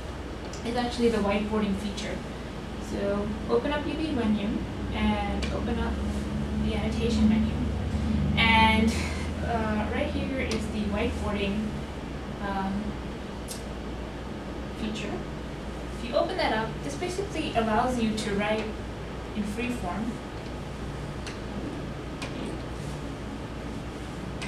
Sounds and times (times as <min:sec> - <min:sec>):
Speech: 0:00.6 - 0:02.2, 0:02.8 - 0:07.8, 0:08.4 - 0:11.8, 0:12.4 - 0:13.0, 0:14.8 - 0:15.3, 0:16.0 - 0:20.2, 0:22.2 - 0:22.6.